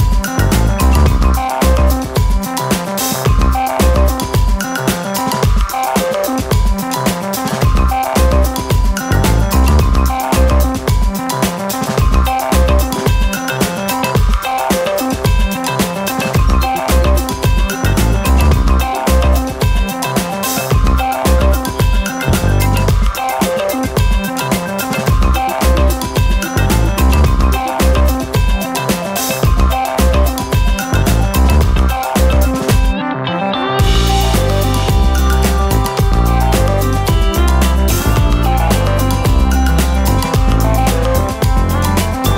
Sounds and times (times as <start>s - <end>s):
Music: 0.0s - 42.3s.